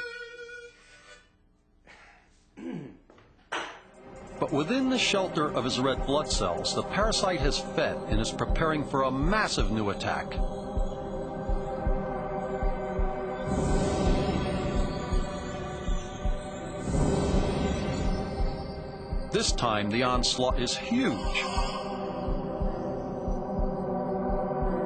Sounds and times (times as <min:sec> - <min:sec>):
Music: 0:03.9 - 0:24.8
Speech: 0:04.4 - 0:10.4, 0:19.4 - 0:21.7.